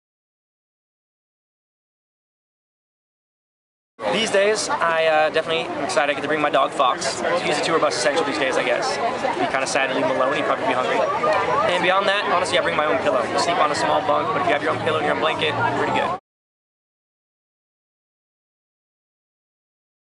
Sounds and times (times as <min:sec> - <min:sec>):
Speech: 0:04.1 - 0:16.2.